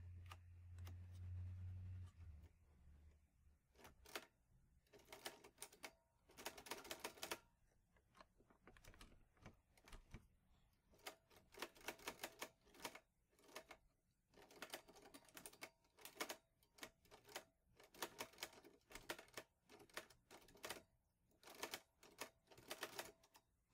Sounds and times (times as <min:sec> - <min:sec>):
Computer keyboard: 0:14.4 - 0:20.8, 0:21.4 - 0:23.4.